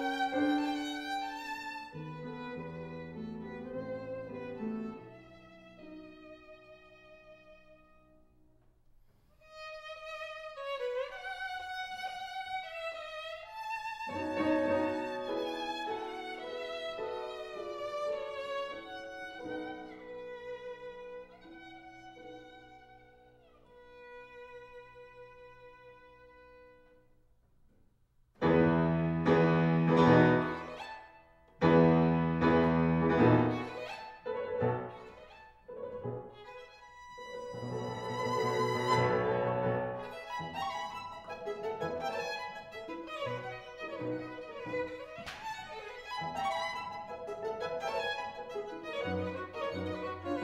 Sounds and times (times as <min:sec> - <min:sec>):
Violin, fiddle: 0:00.0 - 0:08.1, 0:09.4 - 0:27.0, 0:30.1 - 0:31.2, 0:32.4 - 0:50.4.